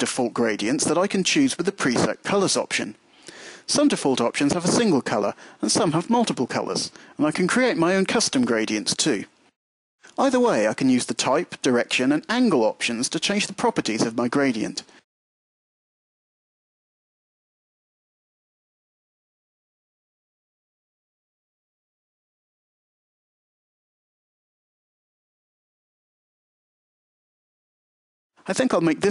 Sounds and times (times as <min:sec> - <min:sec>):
Speech: 0:00.0 - 0:03.0, 0:03.7 - 0:09.3, 0:10.1 - 0:14.9, 0:28.5 - 0:29.1.